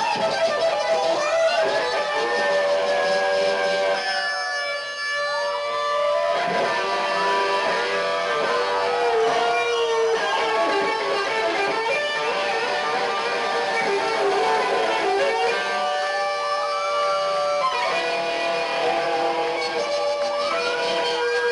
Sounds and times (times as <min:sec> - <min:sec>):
Electric guitar: 0:00.0 - 0:21.5.